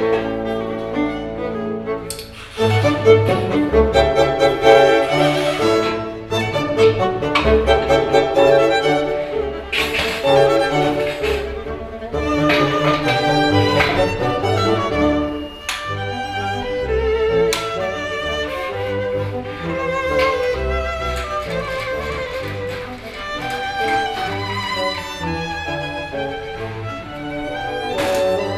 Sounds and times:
Violin, fiddle: 0:00.0 - 0:28.5.

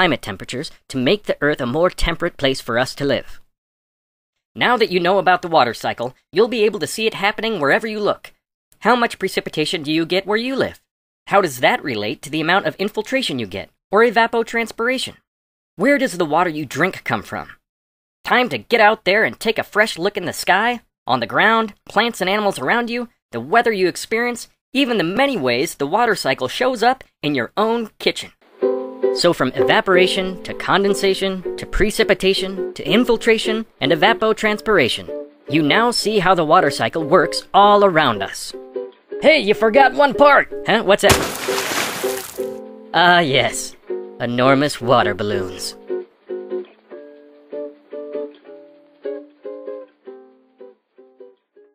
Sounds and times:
Water: 0:41.1 - 0:42.6.

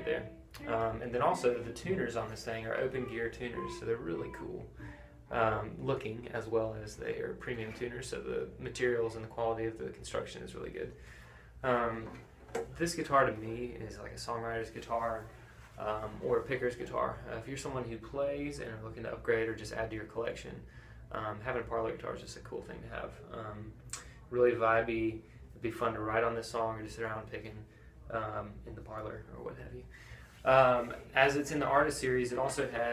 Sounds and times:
Speech: 0:00.0 - 0:11.0, 0:11.6 - 0:32.9.

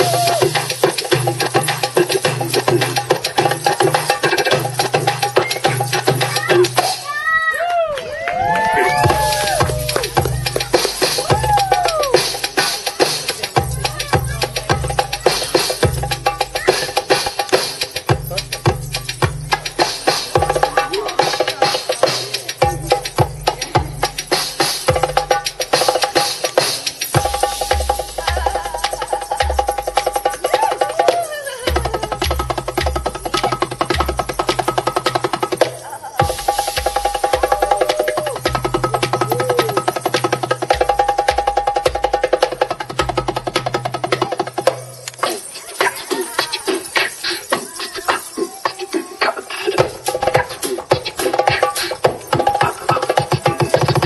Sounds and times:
Music: 0:00.0 - 0:54.0.

